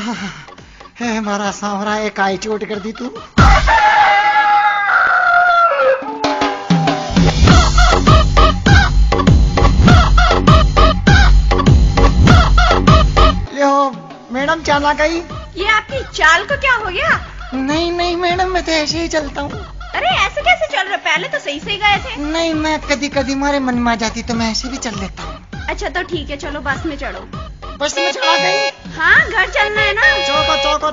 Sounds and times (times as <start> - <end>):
Music: 0.0 - 4.1, 6.0 - 30.9.